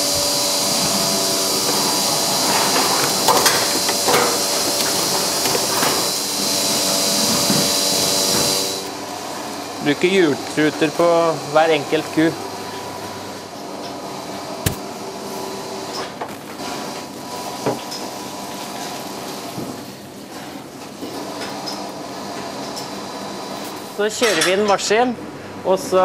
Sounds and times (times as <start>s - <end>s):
Speech: 9.8s - 12.4s, 24.0s - 26.0s.